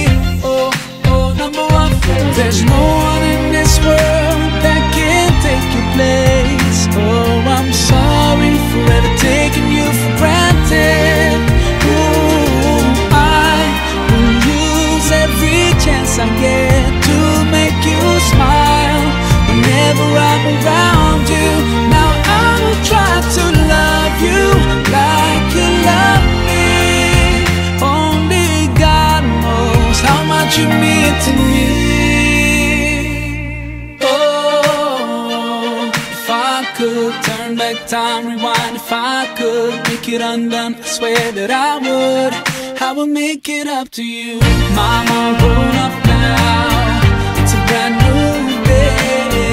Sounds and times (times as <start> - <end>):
Christian music: 0.0 - 49.5
Singing: 0.0 - 49.5.